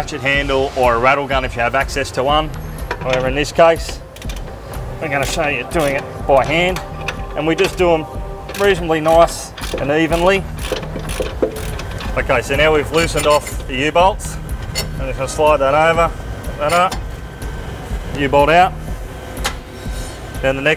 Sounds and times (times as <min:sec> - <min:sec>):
Speech: 0:00.0 - 0:04.0, 0:05.0 - 0:06.8, 0:07.4 - 0:10.4, 0:12.2 - 0:14.4, 0:15.0 - 0:17.0, 0:18.2 - 0:18.8, 0:20.4 - 0:20.7
Music: 0:00.0 - 0:20.7.